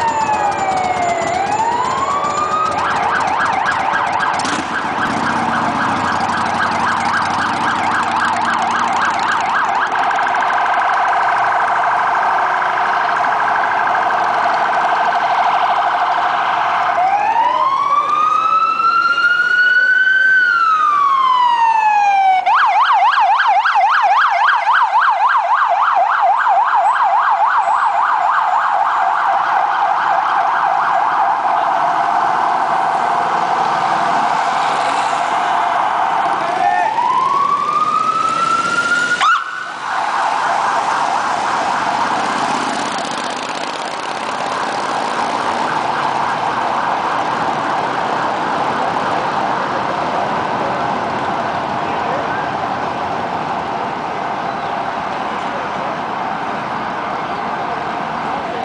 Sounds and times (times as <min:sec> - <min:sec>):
Outside, urban or manmade: 0:00.0 - 0:58.6.